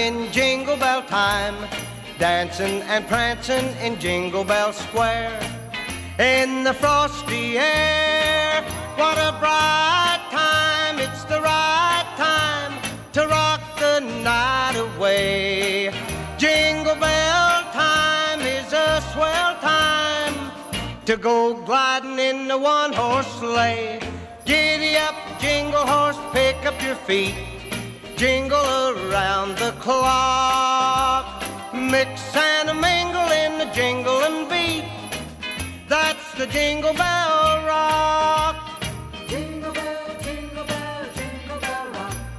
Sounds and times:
Jingle bell: 0.0 - 42.3.

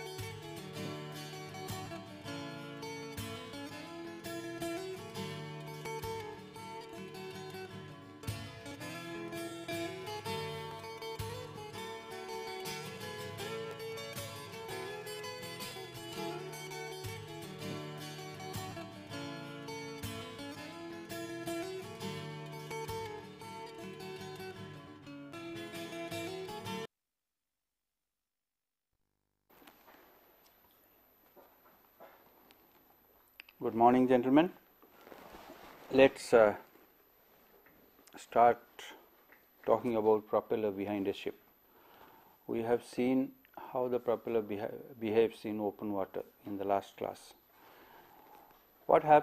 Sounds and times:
Music: 0.0 - 26.9.

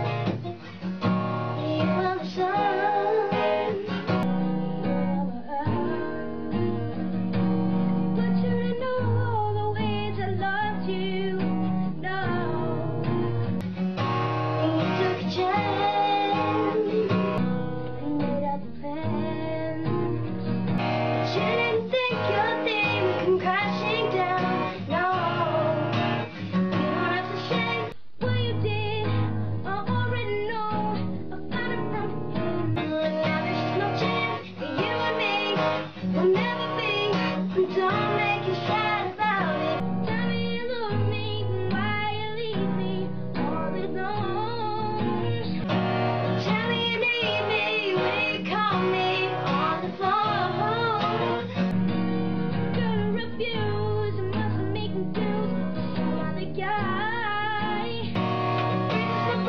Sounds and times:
Music: 0.0 - 59.4
Child singing: 1.6 - 4.2, 8.2 - 12.7, 14.6 - 17.4, 18.0 - 19.9, 21.3 - 26.0, 26.7 - 29.1, 29.7 - 32.1, 32.8 - 45.4, 46.4 - 51.3, 52.8 - 55.6, 56.2 - 58.2, 58.8 - 59.4.

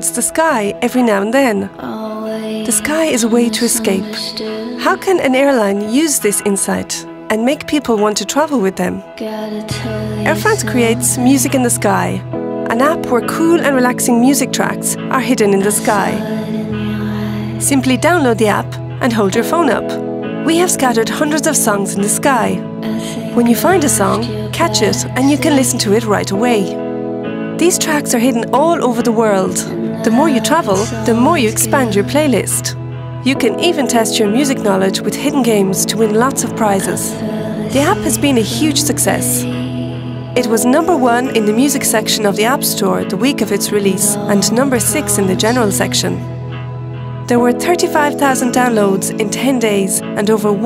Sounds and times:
Speech: 0.0 - 9.0, 10.2 - 16.2, 17.6 - 26.8, 27.6 - 39.5, 40.4 - 46.2, 47.3 - 50.6
Background music: 0.0 - 50.6.

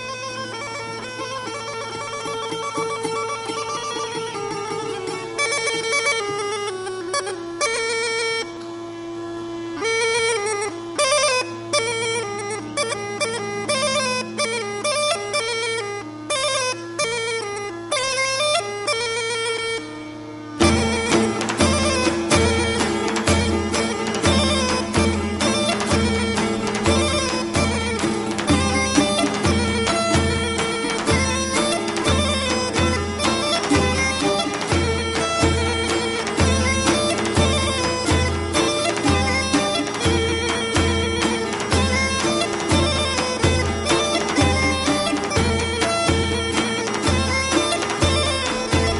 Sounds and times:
Traditional music: 0.0 - 48.9.

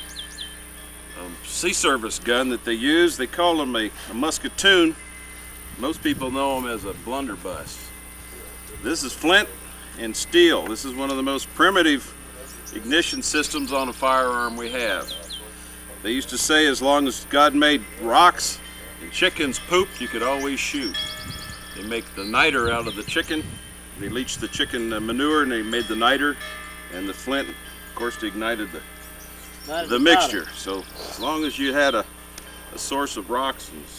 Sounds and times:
Speech: 1.2 - 5.0, 5.8 - 7.9, 8.8 - 12.1, 12.8 - 15.2, 16.0 - 21.0, 24.0 - 26.4, 29.7 - 32.1, 32.8 - 33.9.

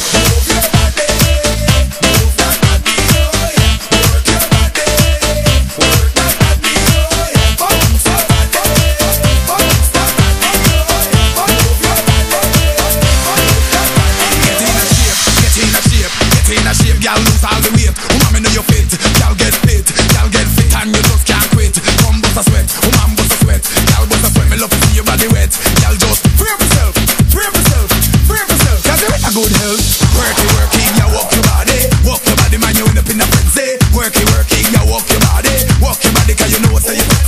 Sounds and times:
Music: 0.0 - 37.2.

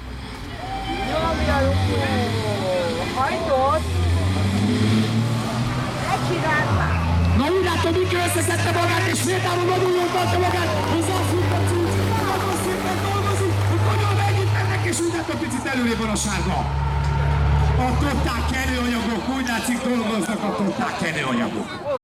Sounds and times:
Speech: 0.7 - 4.5, 6.1 - 16.7, 17.7 - 22.0.

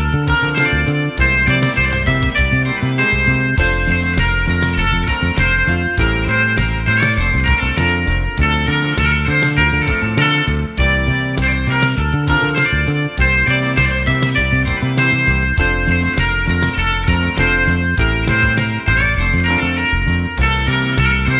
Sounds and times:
Guitar: 0.0 - 21.3.

